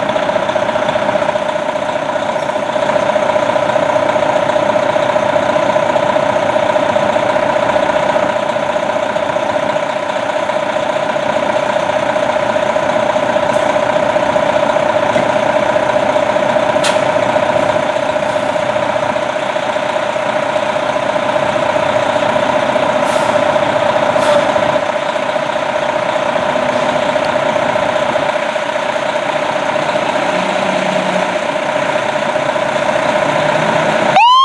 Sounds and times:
Idling: 0:00.0 - 0:34.4
Medium engine (mid frequency): 0:00.0 - 0:34.4
Truck: 0:00.0 - 0:34.4.

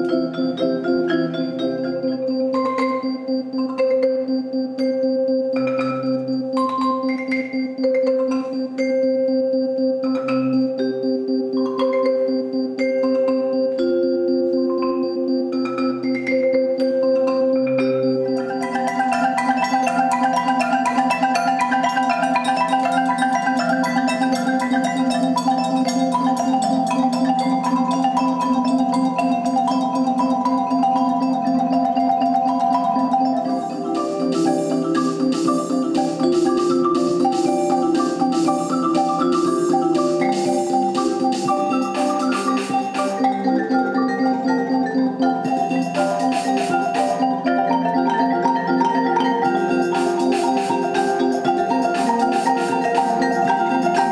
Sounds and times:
Marimba, xylophone: 0:00.0 - 0:54.1
Vibraphone: 0:00.0 - 0:54.1.

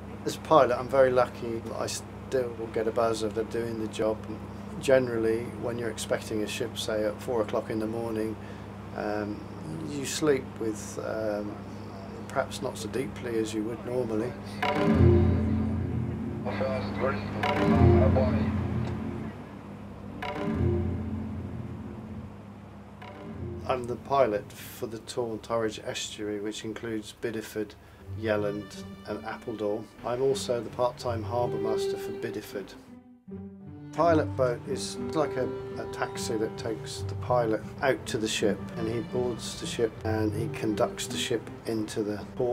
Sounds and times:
Speech: 0:00.2 - 0:08.4, 0:09.0 - 0:14.6, 0:16.4 - 0:18.8, 0:23.7 - 0:32.8, 0:34.0 - 0:42.5
Music: 0:02.6 - 0:10.6, 0:11.5 - 0:24.7, 0:28.0 - 0:42.5.

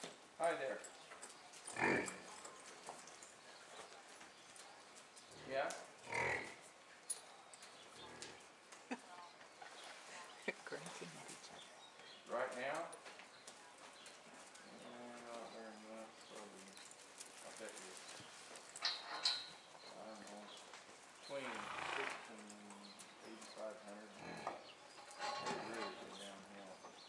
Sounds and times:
Clip-clop: 0:00.0 - 0:27.0
Speech: 0:14.7 - 0:16.8, 0:17.4 - 0:18.1, 0:19.9 - 0:20.6, 0:21.3 - 0:24.3, 0:25.4 - 0:26.9.

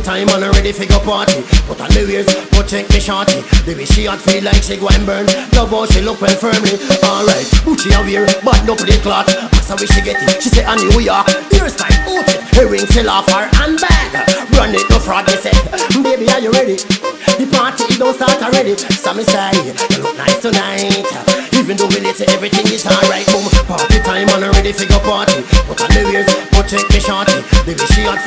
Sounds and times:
Pop music: 0:00.0 - 0:28.2
Funk: 0:00.3 - 0:28.2.

